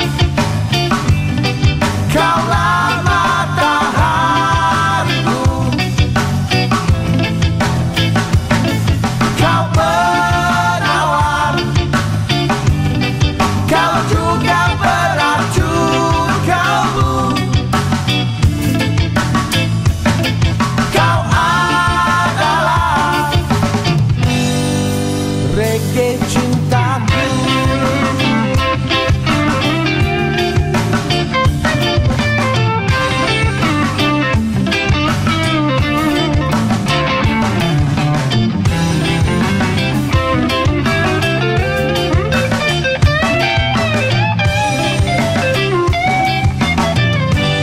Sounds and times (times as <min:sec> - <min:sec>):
Reggae: 0:00.0 - 0:47.6
Rock music: 0:00.0 - 0:47.6.